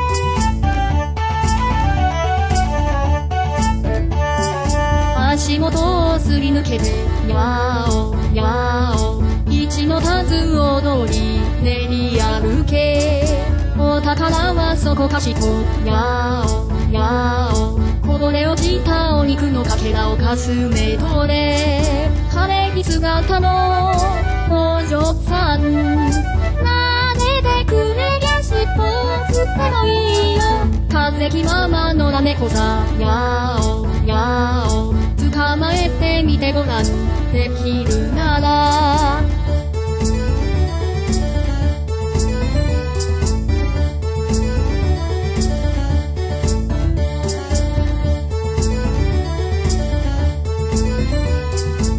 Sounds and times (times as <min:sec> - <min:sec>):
Music: 0:00.0 - 0:51.9.